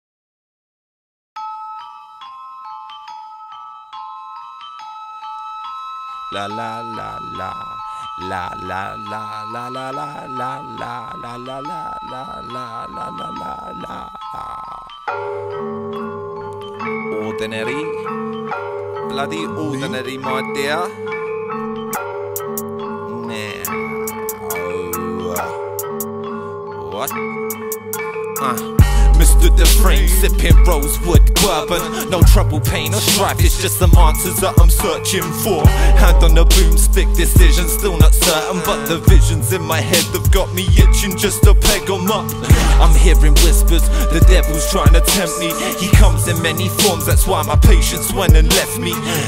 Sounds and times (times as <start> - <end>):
Pop music: 6.3 - 49.2.